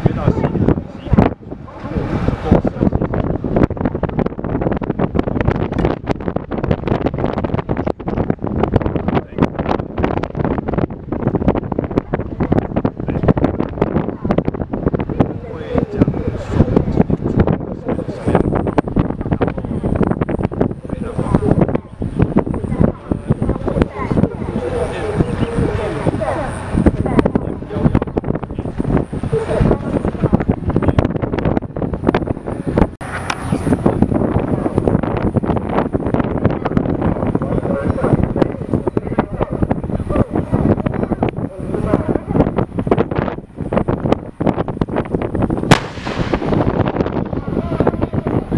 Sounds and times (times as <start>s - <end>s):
Speech: 0.0s - 4.2s, 14.0s - 20.0s, 20.8s - 31.1s, 36.4s - 42.6s, 47.4s - 48.5s
Outside, rural or natural: 0.0s - 48.5s.